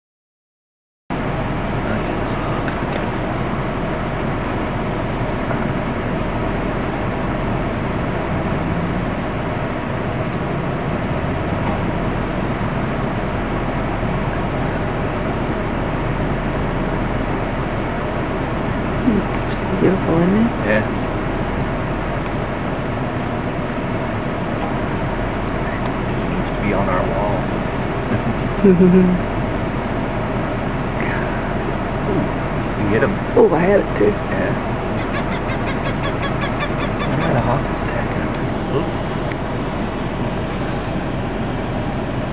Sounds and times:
Outside, rural or natural: 0:01.1 - 0:42.3
Speech: 0:01.8 - 0:03.2, 0:19.1 - 0:21.0, 0:25.5 - 0:27.5, 0:28.1 - 0:29.2, 0:31.0 - 0:34.6, 0:37.1 - 0:39.0
Bird: 0:34.9 - 0:37.6.

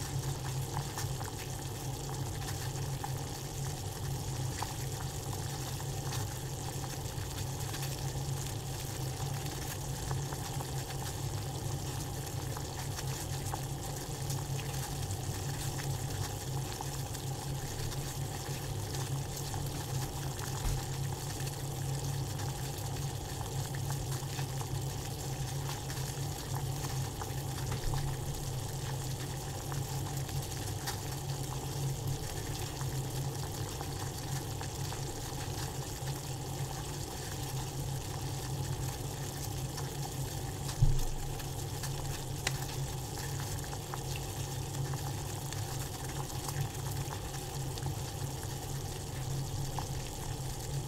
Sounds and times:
Frying (food): 0:00.0 - 0:50.8.

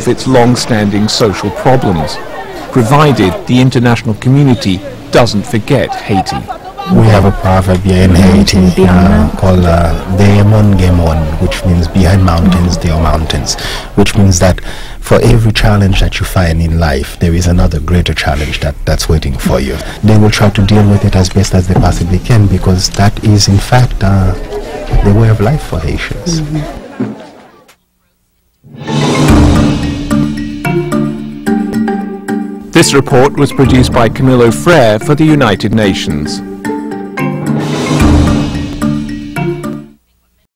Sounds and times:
Speech: 0:00.0 - 0:28.2, 0:32.8 - 0:36.4
Percussion: 0:28.6 - 0:35.3, 0:35.9 - 0:40.0.

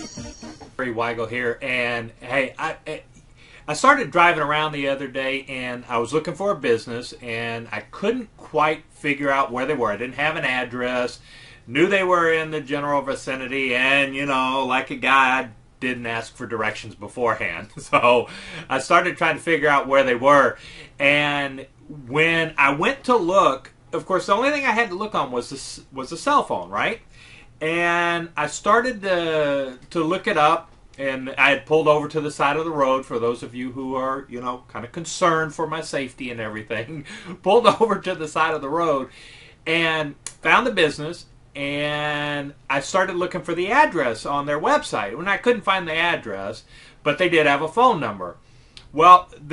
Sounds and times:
Speech: 0:00.8 - 0:03.1, 0:03.7 - 0:27.0, 0:27.6 - 0:39.1, 0:39.7 - 0:49.5.

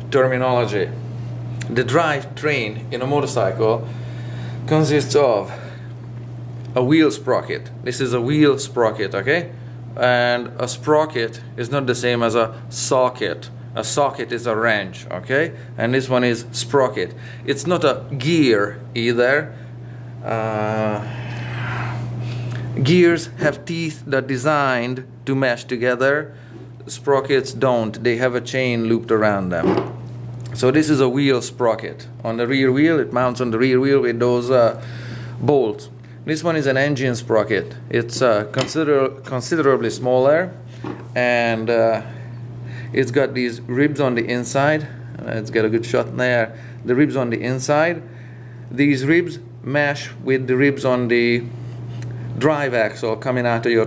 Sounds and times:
Speech: 0:00.1 - 0:01.0, 0:01.6 - 0:03.9, 0:04.7 - 0:05.7, 0:06.8 - 0:19.6, 0:20.2 - 0:21.1, 0:22.8 - 0:29.8, 0:30.6 - 0:34.8, 0:35.4 - 0:40.6, 0:41.2 - 0:42.1, 0:43.0 - 0:48.1, 0:48.7 - 0:51.5, 0:52.4 - 0:53.8.

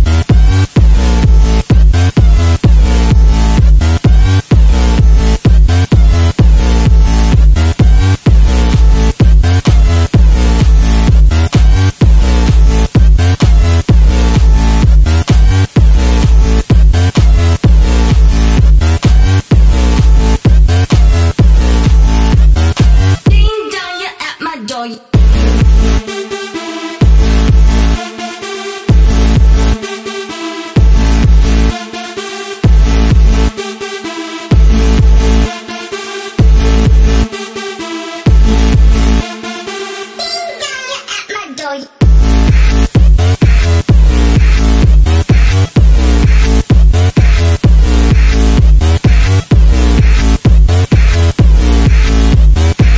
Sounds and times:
Dubstep: 0:00.0 - 0:24.4, 0:25.1 - 0:52.9.

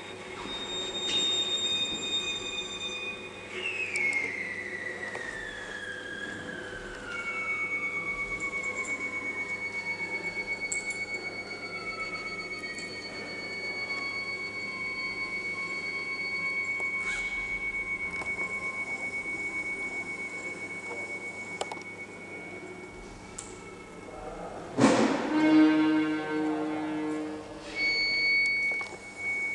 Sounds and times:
Speech: 0:24.0 - 0:25.1
Music: 0:24.8 - 0:27.4.

